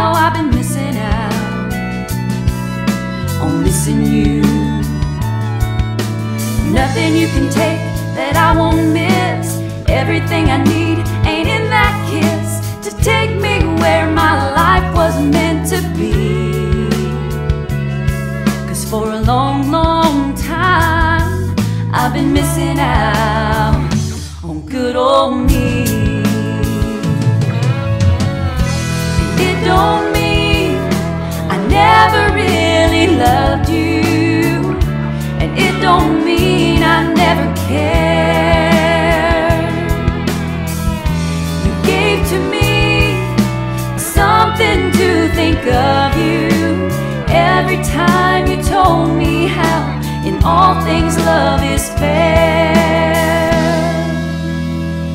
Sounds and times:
Music: 0.0 - 55.1.

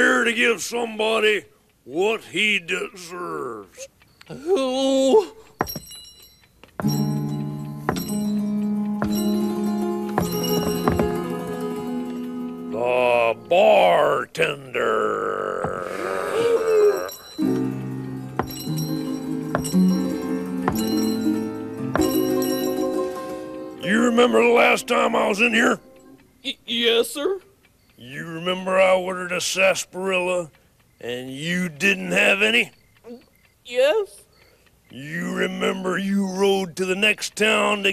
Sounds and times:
Speech: 0.0 - 5.3, 12.8 - 15.4, 23.8 - 25.8, 28.0 - 34.2, 34.9 - 37.9
Music: 6.8 - 13.6, 17.4 - 26.2.

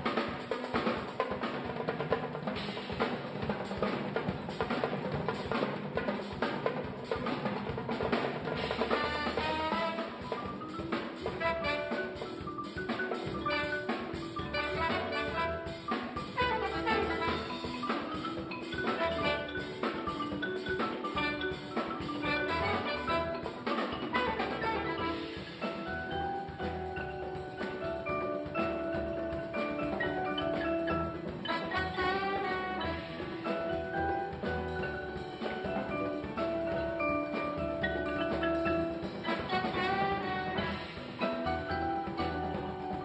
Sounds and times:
Percussion: 0.0 - 43.0.

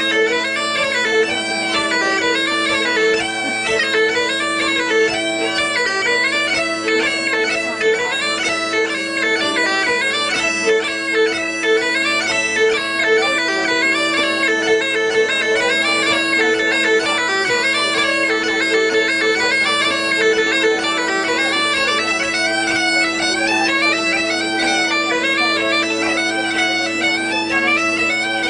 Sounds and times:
Violin, fiddle: 0.0 - 28.4.

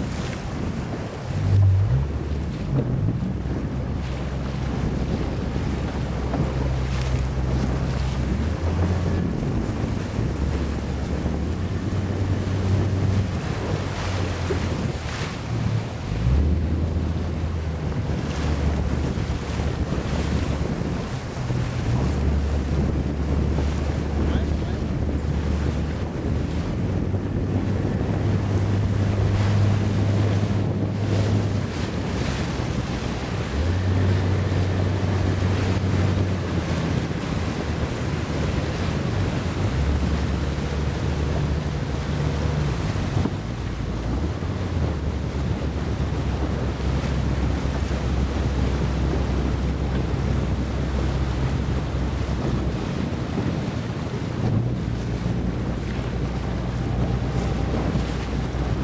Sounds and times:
Sailboat, sailing ship: 0.0 - 58.8
Waves, surf: 0.0 - 58.8
Wind noise (microphone): 0.0 - 58.8.

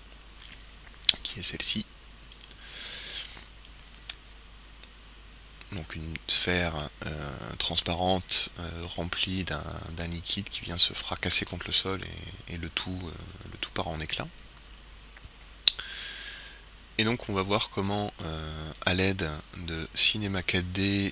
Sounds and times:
Speech: 1.1 - 1.9, 5.7 - 14.3, 17.0 - 21.1.

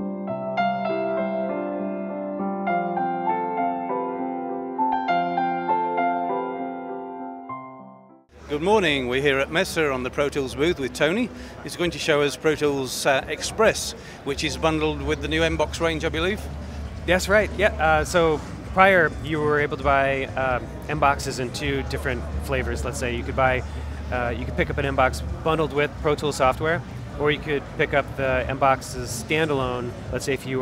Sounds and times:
Speech: 8.5 - 30.6.

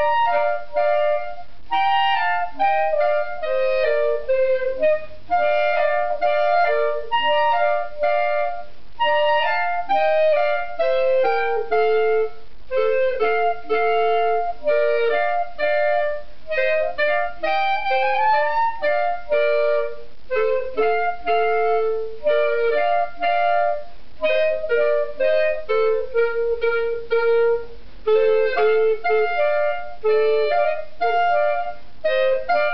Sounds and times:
Clarinet: 0.0 - 32.7.

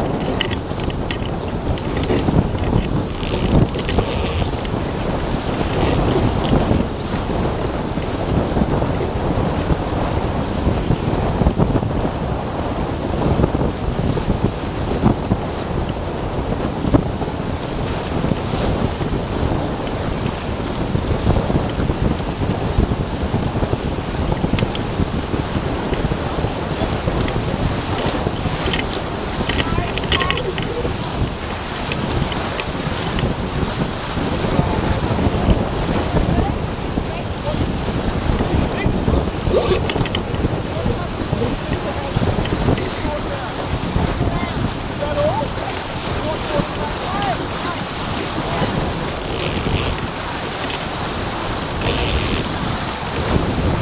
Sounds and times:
Boat, Water vehicle: 0.0 - 53.8
Waves, surf: 0.0 - 53.8
Speech: 29.6 - 31.3, 36.2 - 37.7, 38.7 - 39.8, 40.7 - 48.7.

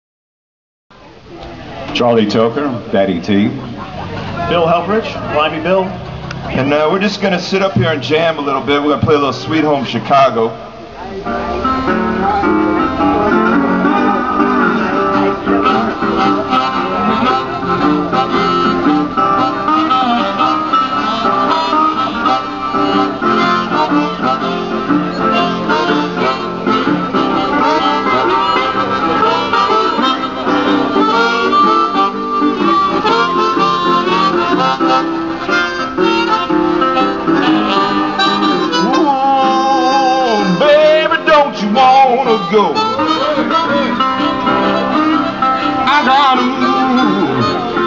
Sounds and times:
Electric guitar: 10.6 - 47.8.

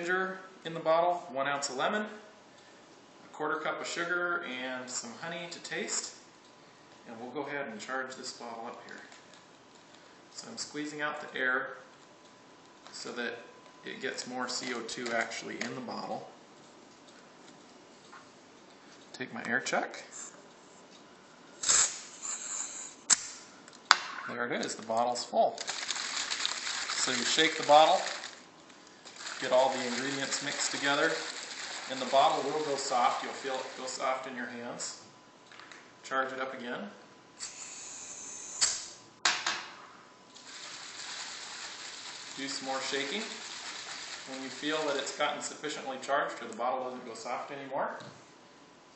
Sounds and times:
Water: 29.2 - 34.0, 40.4 - 45.2.

